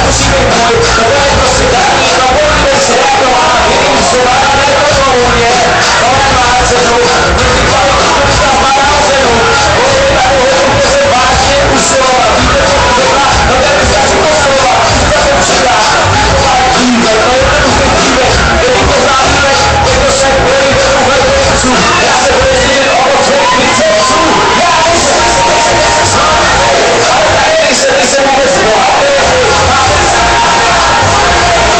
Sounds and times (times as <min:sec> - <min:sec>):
Exciting music: 0:00.0 - 0:31.7.